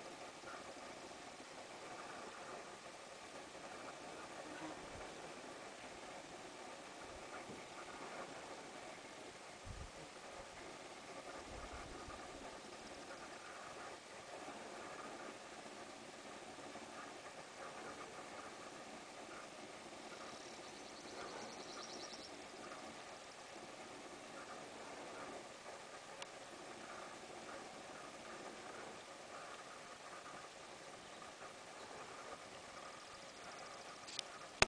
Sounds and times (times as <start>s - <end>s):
Animal: 0.0s - 9.3s, 10.0s - 34.6s.